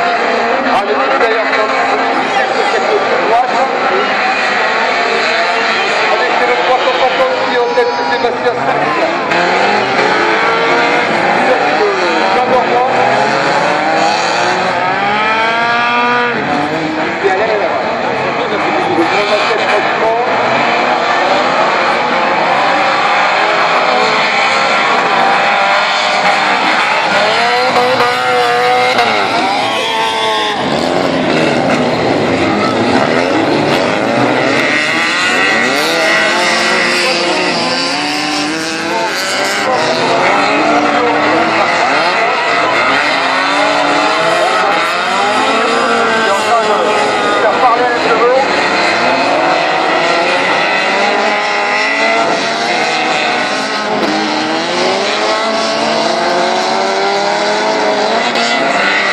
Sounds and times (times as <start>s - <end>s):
Car: 0.0s - 59.1s
Speech: 0.1s - 4.3s, 5.2s - 9.5s, 11.4s - 13.3s, 17.1s - 20.4s, 36.7s - 37.8s, 39.2s - 43.6s, 44.8s - 48.7s.